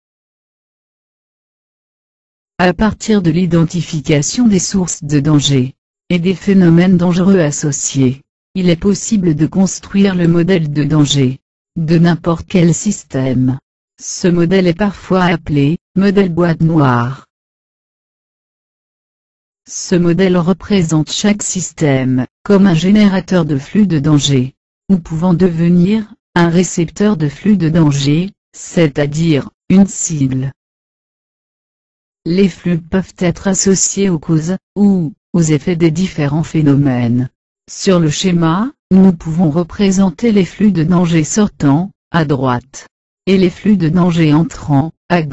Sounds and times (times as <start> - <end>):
Speech: 2.6 - 17.3, 19.7 - 30.6, 32.3 - 45.3.